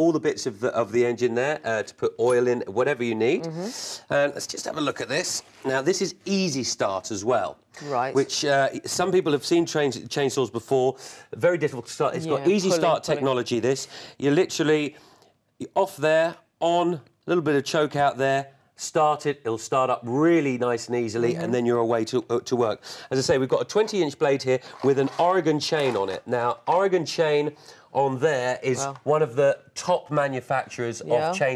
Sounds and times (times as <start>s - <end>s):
Speech: 0.0s - 14.9s, 15.6s - 31.5s.